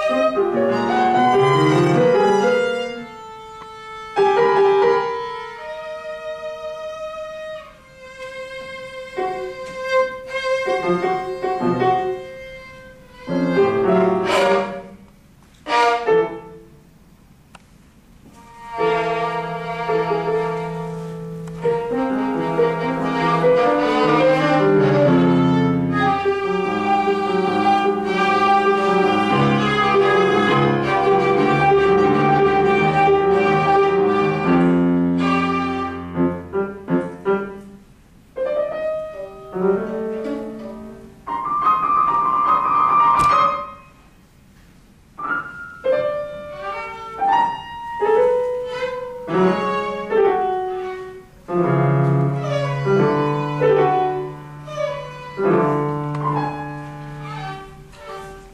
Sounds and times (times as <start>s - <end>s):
Violin, fiddle: 0.0s - 15.0s, 18.4s - 36.5s, 46.1s - 51.3s, 52.1s - 58.5s.